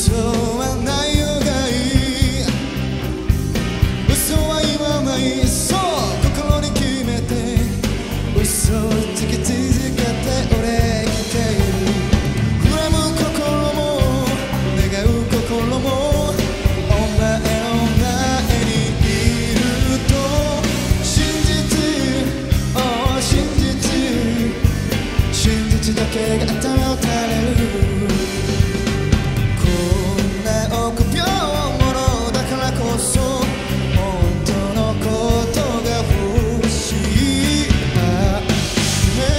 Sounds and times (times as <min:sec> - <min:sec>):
Rock and roll: 0:00.0 - 0:39.3
Singing: 0:04.1 - 0:28.7, 0:29.6 - 0:39.3.